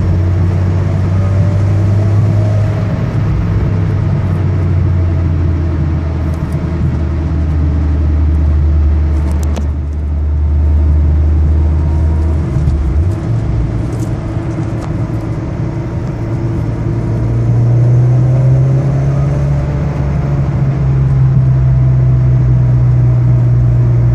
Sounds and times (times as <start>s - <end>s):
Car: 0.0s - 24.1s.